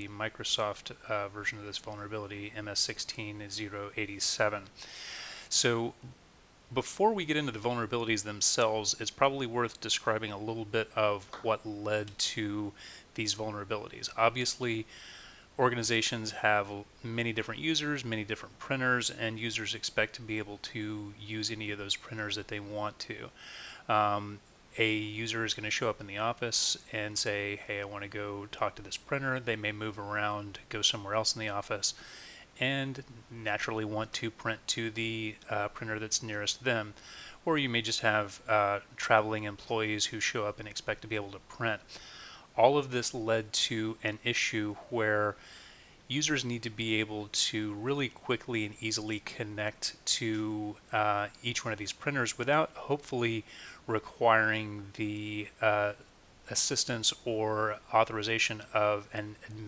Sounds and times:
Speech: 0:00.0 - 0:04.8, 0:05.5 - 0:14.9, 0:15.6 - 0:32.0, 0:32.6 - 0:42.0, 0:42.6 - 0:45.4, 0:46.1 - 0:59.6.

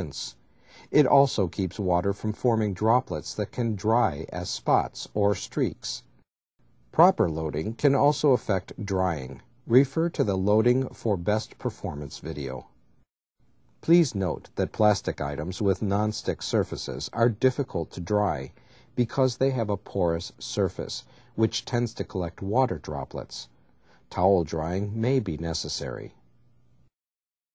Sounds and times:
Speech: 0:00.0 - 0:06.1, 0:06.9 - 0:12.8, 0:13.8 - 0:26.2.

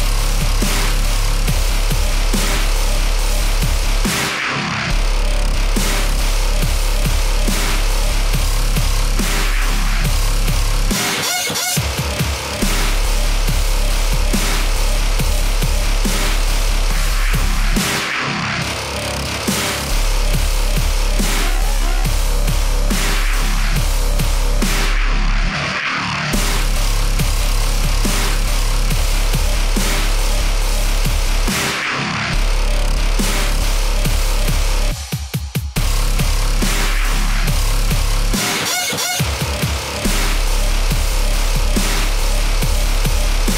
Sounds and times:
Dubstep: 0:00.0 - 0:43.5.

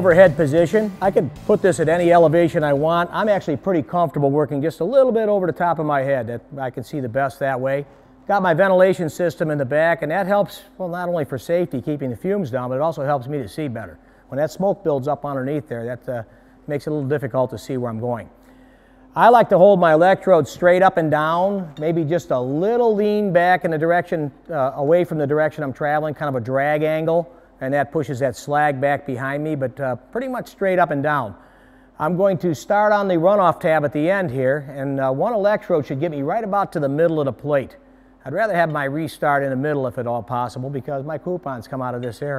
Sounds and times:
Speech: 0:00.0 - 0:18.4, 0:19.2 - 0:31.4, 0:32.0 - 0:42.3.

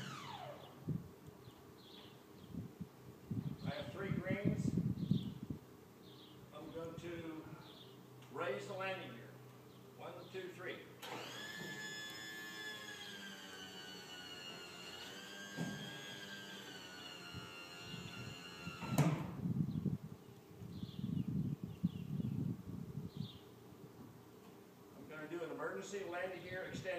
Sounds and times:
Electric shaver, electric razor: 0:00.0 - 0:00.6, 0:11.0 - 0:19.2
Speech: 0:03.7 - 0:04.8, 0:06.6 - 0:07.6, 0:08.3 - 0:09.4, 0:10.0 - 0:10.9, 0:25.0 - 0:26.9.

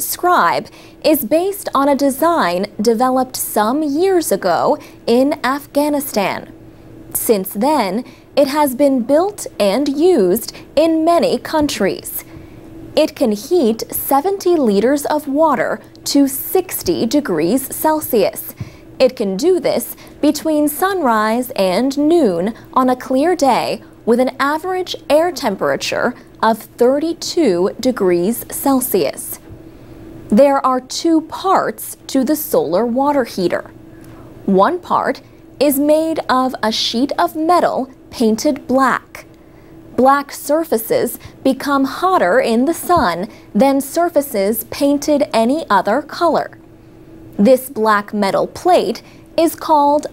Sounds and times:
Speech: 0:00.0 - 0:06.5, 0:07.2 - 0:12.3, 0:13.0 - 0:29.4, 0:30.3 - 0:33.8, 0:34.5 - 0:39.3, 0:40.0 - 0:46.6, 0:47.4 - 0:50.1.

